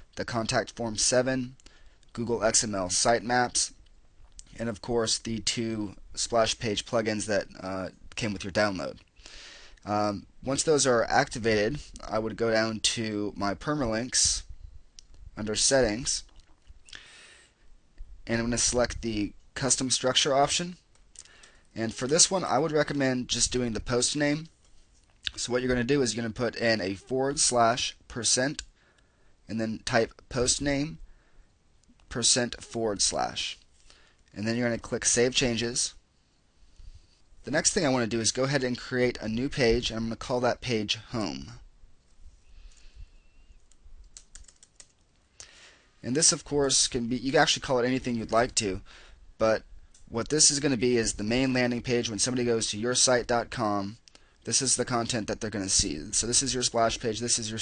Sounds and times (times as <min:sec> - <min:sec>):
Speech: 0:00.2 - 0:03.8, 0:04.4 - 0:09.0, 0:09.8 - 0:14.5, 0:15.4 - 0:16.3, 0:18.2 - 0:20.8, 0:21.8 - 0:24.5, 0:25.3 - 0:28.7, 0:29.5 - 0:31.0, 0:32.1 - 0:33.6, 0:34.3 - 0:36.0, 0:37.5 - 0:41.7, 0:46.0 - 0:48.8, 0:49.4 - 0:57.6.